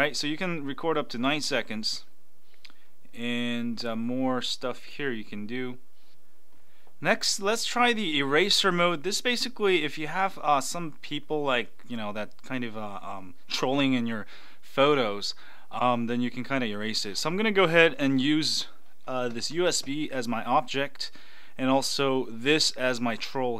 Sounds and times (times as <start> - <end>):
Speech: 0.0 - 2.1, 3.2 - 5.8, 7.0 - 23.5.